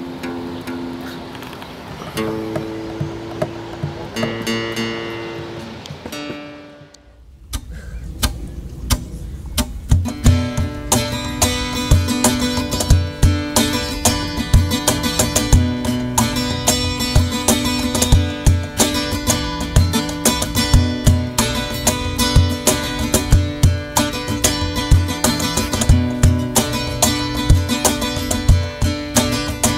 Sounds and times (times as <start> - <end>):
Music: 2.2 - 7.2, 9.6 - 29.7.